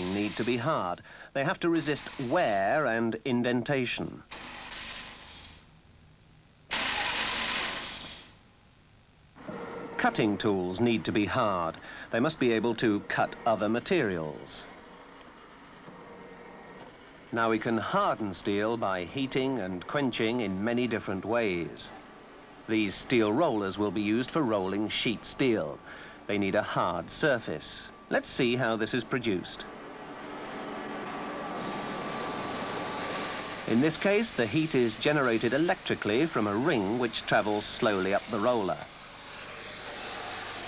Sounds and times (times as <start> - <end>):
Speech: 0.0 - 4.3, 10.0 - 14.7, 17.3 - 22.0, 22.7 - 29.7, 33.7 - 38.9.